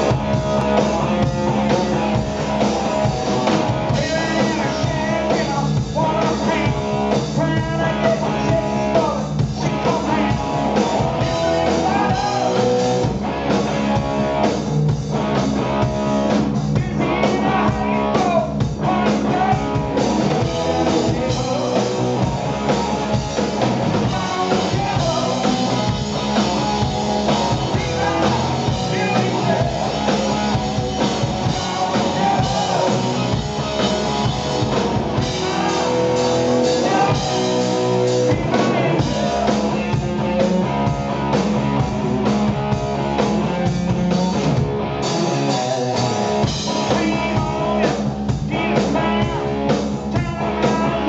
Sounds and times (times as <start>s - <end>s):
Music: 0.0s - 51.0s.